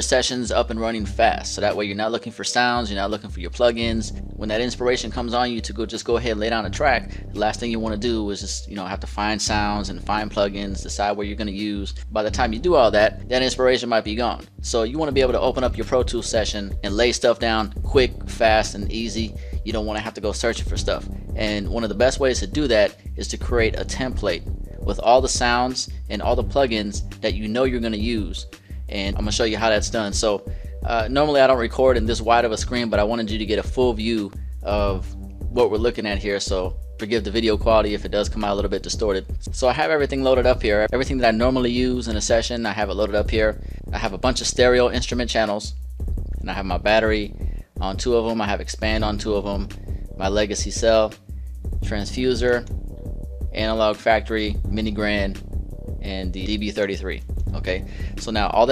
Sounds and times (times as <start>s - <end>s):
Speech: 0.0s - 45.8s, 46.4s - 51.2s, 51.8s - 52.7s, 53.5s - 55.4s, 56.0s - 58.7s.